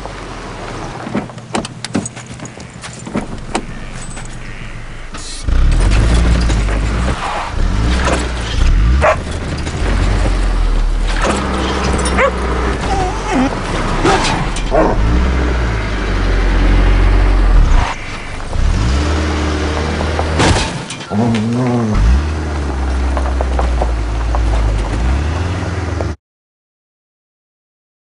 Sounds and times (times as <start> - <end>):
Vehicle: 0.0 - 26.2.